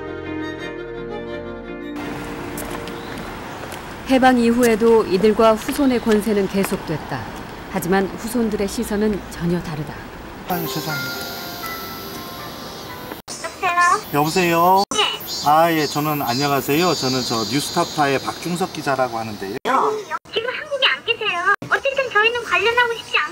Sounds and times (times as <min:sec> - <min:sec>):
Music: 0:00.0 - 0:02.3, 0:10.5 - 0:13.2
Outside, urban or manmade: 0:00.0 - 0:23.3
Speech: 0:04.1 - 0:07.2.